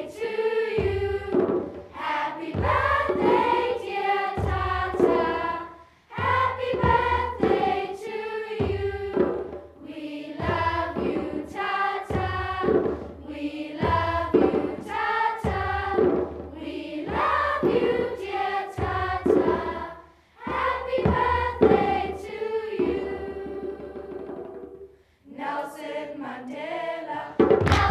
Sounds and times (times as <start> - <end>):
Choir: 0.0 - 27.9
Child singing: 2.0 - 9.2, 25.3 - 27.9.